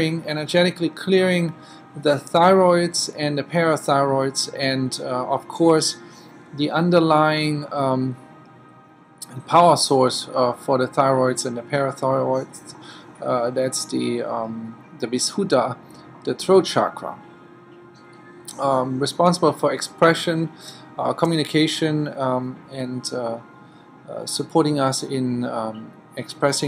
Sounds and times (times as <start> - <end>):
Speech: 0.0 - 6.0, 6.6 - 8.2, 9.2 - 17.2, 18.5 - 23.4, 24.1 - 26.6
Music: 0.0 - 26.6.